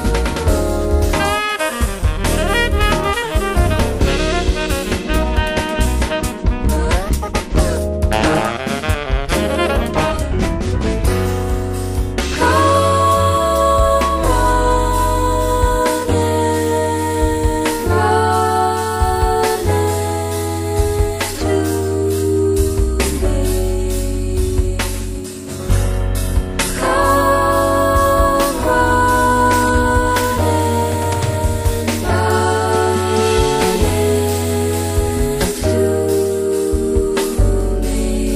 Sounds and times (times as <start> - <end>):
Jazz: 0.0 - 38.3.